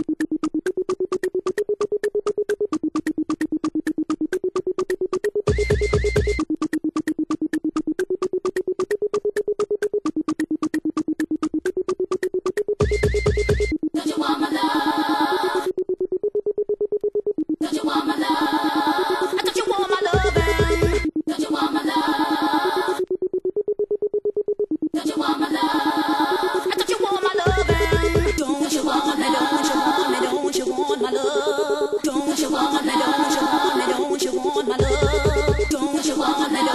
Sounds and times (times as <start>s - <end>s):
Electronic music: 0.0s - 36.7s.